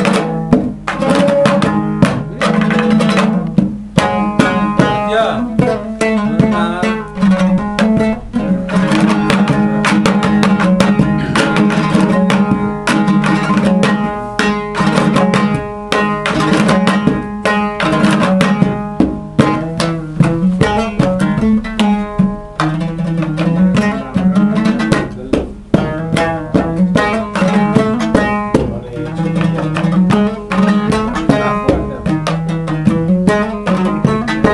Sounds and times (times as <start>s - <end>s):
Pizzicato: 0.0s - 34.5s.